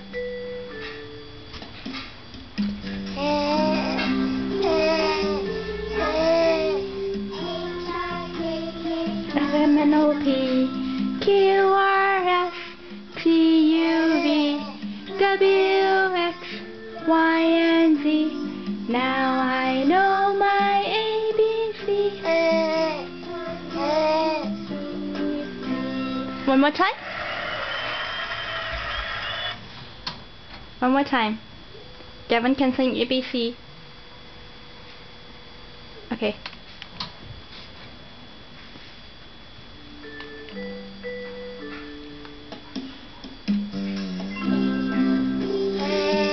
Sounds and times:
Speech: 0:32.3 - 0:33.6, 0:36.1 - 0:36.4.

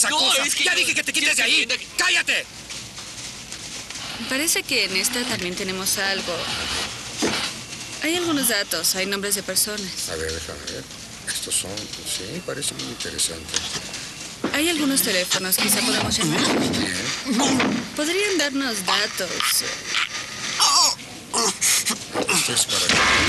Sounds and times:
Speech: 0:08.0 - 0:13.6.

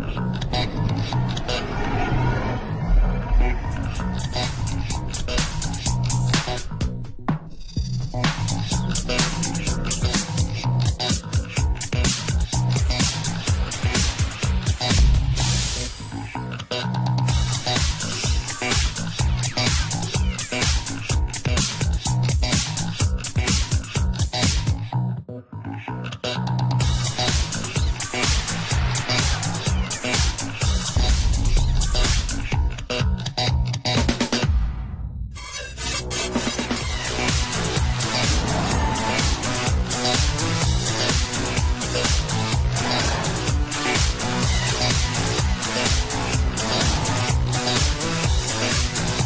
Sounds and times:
Music: 0:00.0 - 0:49.2.

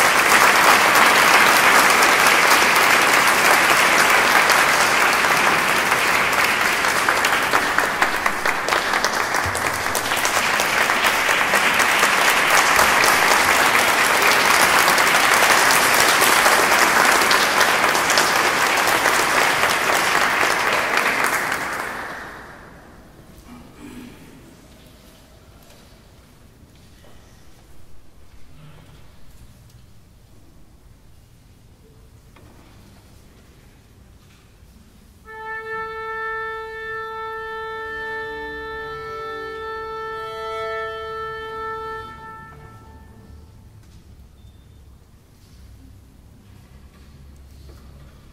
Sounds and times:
Classical music: 0:00.0 - 0:23.4, 0:35.2 - 0:43.9
Orchestra: 0:00.0 - 0:23.5, 0:35.2 - 0:44.6.

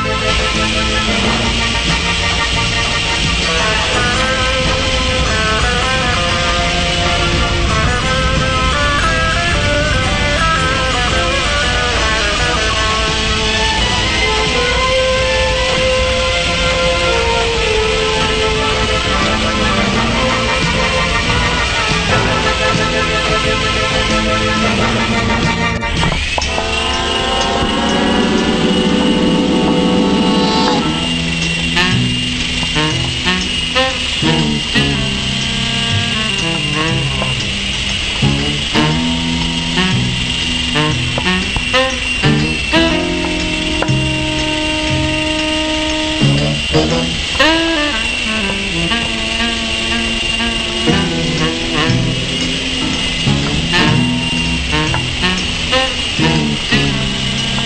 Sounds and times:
Music: 0:00.0 - 0:57.6.

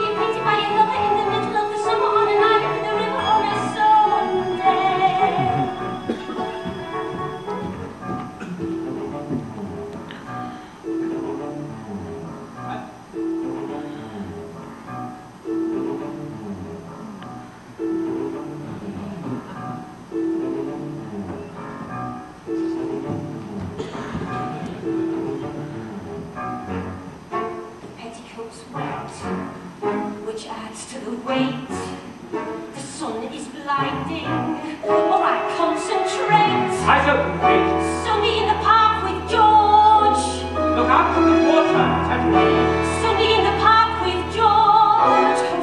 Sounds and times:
Classical music: 0:00.0 - 0:45.6.

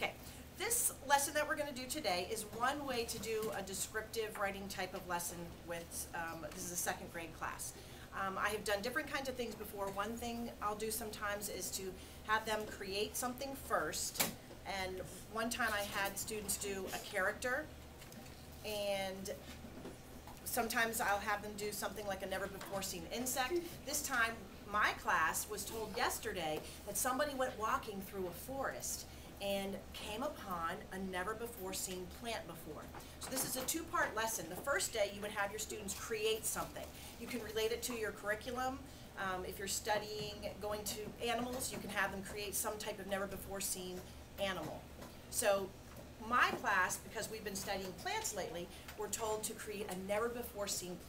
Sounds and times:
Speech: 0:00.0 - 0:17.7, 0:18.6 - 0:19.5, 0:20.4 - 0:51.0.

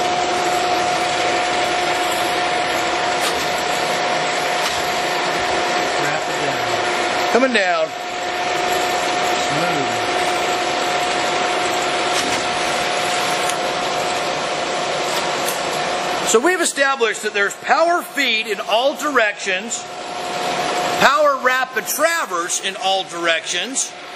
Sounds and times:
Speech: 0:06.0 - 0:06.8, 0:09.4 - 0:10.1, 0:16.3 - 0:19.8, 0:21.0 - 0:23.9.

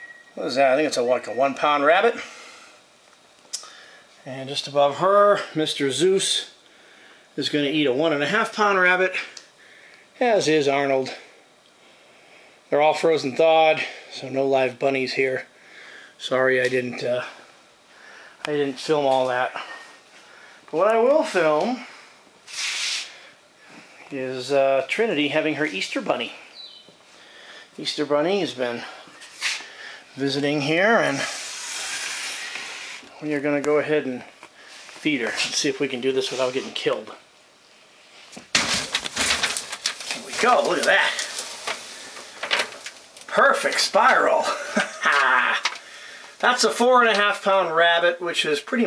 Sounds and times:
Speech: 0:00.4 - 0:02.3, 0:04.2 - 0:06.6, 0:07.4 - 0:09.4, 0:10.2 - 0:11.3, 0:12.7 - 0:15.5, 0:16.2 - 0:17.4, 0:18.5 - 0:19.7, 0:20.7 - 0:21.9, 0:24.1 - 0:26.4, 0:27.8 - 0:29.0, 0:30.2 - 0:31.4, 0:33.2 - 0:34.3, 0:35.0 - 0:37.2, 0:40.2 - 0:41.3, 0:43.3 - 0:45.6, 0:46.4 - 0:48.8.

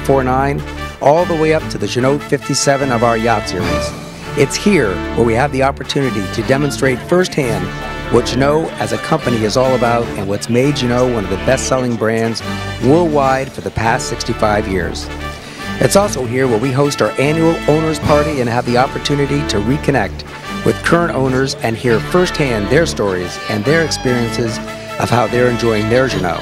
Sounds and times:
Speech: 0:00.0 - 0:15.1, 0:15.8 - 0:26.4
Music: 0:00.0 - 0:26.4.

